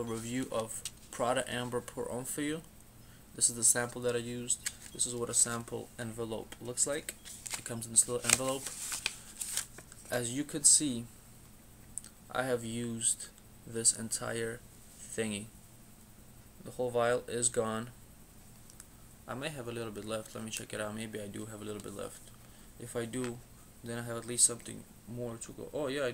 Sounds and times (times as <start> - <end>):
Speech: 0.0 - 2.7, 3.4 - 7.1, 7.7 - 8.7, 10.1 - 11.1, 12.3 - 15.5, 16.6 - 18.0, 19.3 - 26.1.